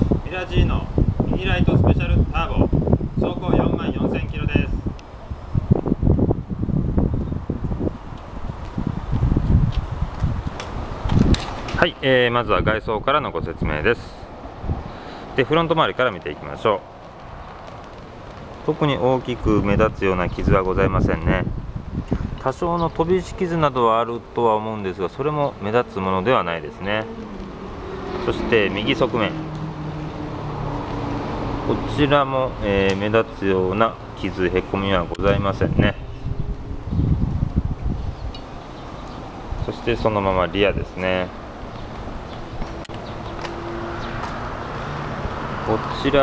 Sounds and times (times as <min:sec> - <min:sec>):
Speech: 0:00.2 - 0:04.8, 0:11.8 - 0:14.3, 0:15.4 - 0:16.8, 0:18.7 - 0:21.5, 0:22.4 - 0:27.1, 0:28.2 - 0:29.4, 0:31.7 - 0:36.0, 0:39.6 - 0:41.4, 0:45.7 - 0:46.2.